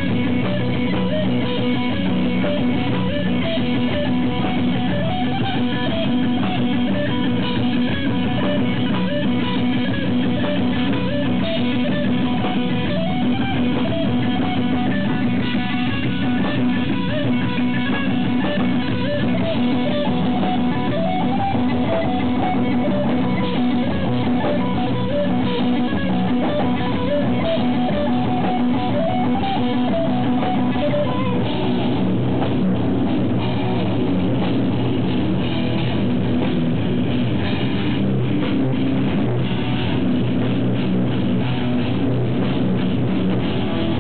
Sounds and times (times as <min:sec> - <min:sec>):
Heavy metal: 0:00.0 - 0:44.0.